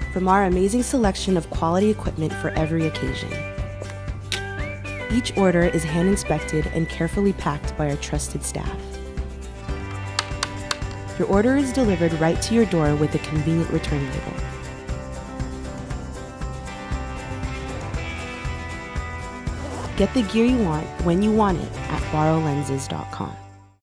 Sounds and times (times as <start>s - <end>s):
Music: 0.0s - 23.8s
Speech: 0.2s - 3.4s, 5.1s - 8.8s, 11.2s - 14.4s, 20.0s - 23.4s.